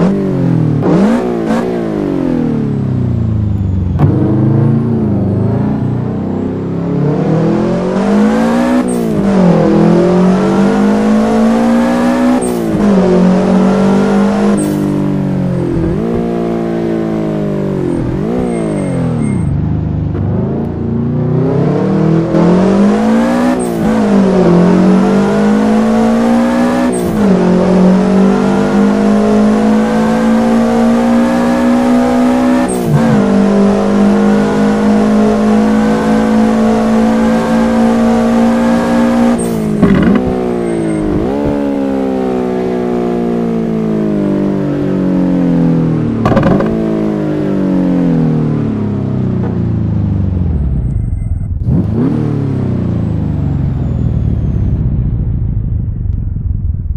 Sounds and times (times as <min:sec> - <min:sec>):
Accelerating, revving, vroom: 0:00.0 - 0:02.8, 0:04.0 - 0:19.5, 0:20.2 - 0:49.0, 0:51.6 - 0:54.5
Car: 0:00.0 - 0:56.9.